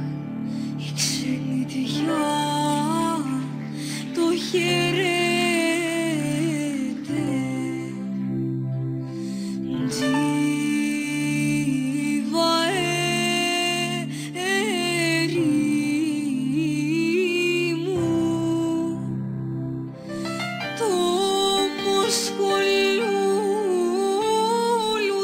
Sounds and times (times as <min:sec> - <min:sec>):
Soul music: 0:00.0 - 0:25.2.